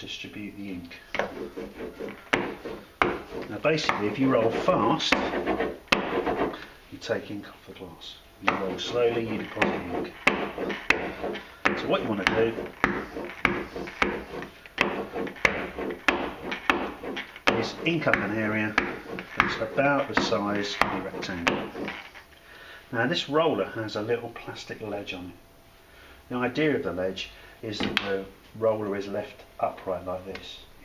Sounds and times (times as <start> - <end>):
Rub: 1.2 - 6.6, 8.5 - 22.2.